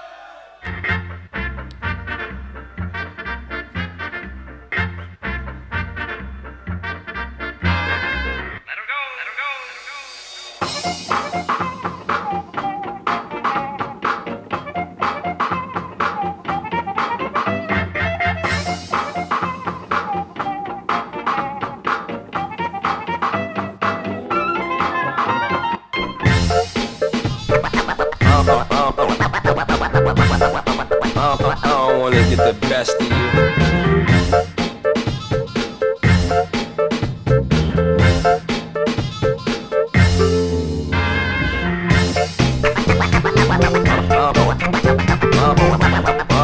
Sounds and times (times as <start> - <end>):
Funk: 10.6 - 46.4.